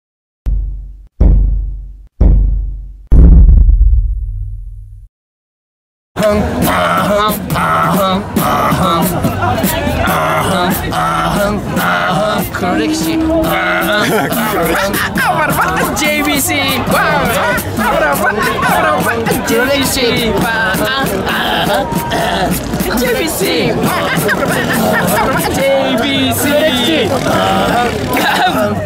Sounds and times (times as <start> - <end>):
Beatboxing: 6.2 - 28.8
Speech: 8.4 - 12.2, 13.0 - 28.8.